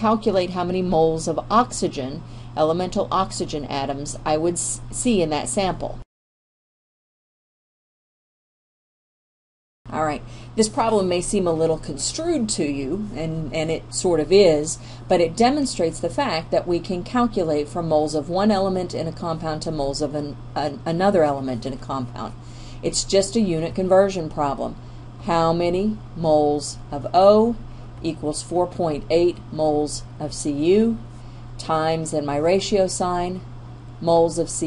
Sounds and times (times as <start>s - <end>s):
Speech: 0.0s - 6.0s, 9.9s - 31.0s, 31.6s - 34.6s.